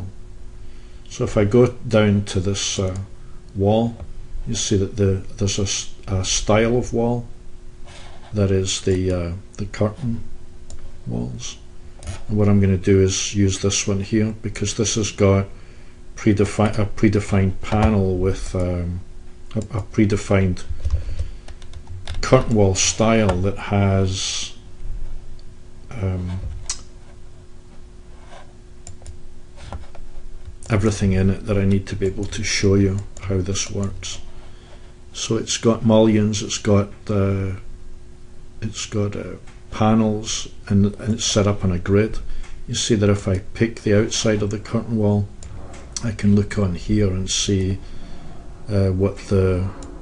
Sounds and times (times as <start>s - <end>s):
Speech: 1.1s - 7.3s, 8.3s - 10.3s, 11.0s - 15.6s, 16.2s - 20.7s, 22.1s - 24.6s, 25.9s - 26.5s, 30.7s - 34.3s, 35.2s - 37.7s, 38.6s - 45.4s, 46.0s - 47.8s, 48.7s - 49.8s.